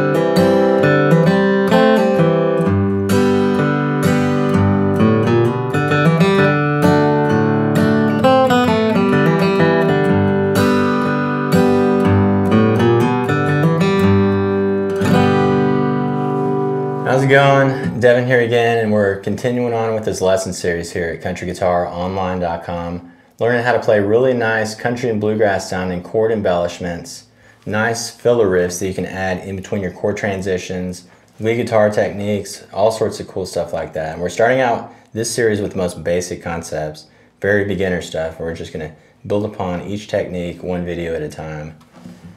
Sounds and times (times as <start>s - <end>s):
Speech: 17.0s - 41.8s.